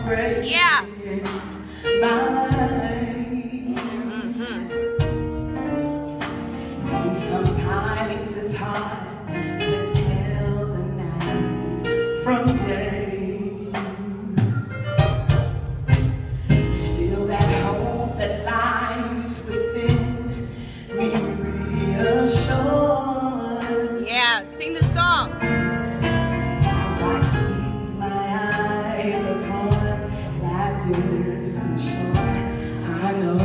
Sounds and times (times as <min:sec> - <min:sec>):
Music: 0:00.0 - 0:33.4.